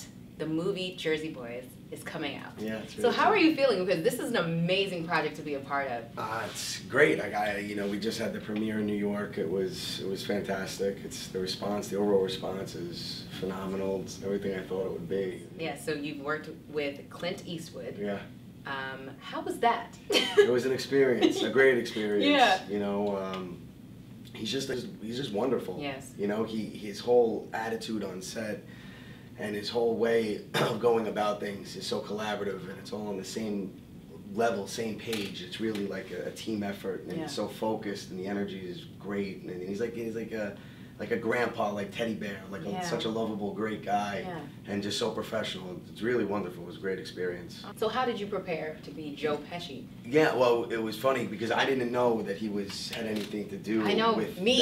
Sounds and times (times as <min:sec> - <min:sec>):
Speech: 0:02.0 - 0:03.6, 0:34.3 - 0:48.6.